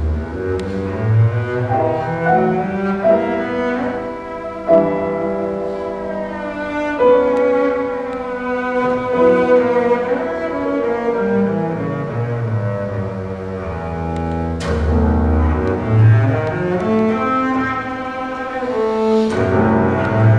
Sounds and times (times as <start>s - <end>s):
Double bass: 0.0s - 20.3s.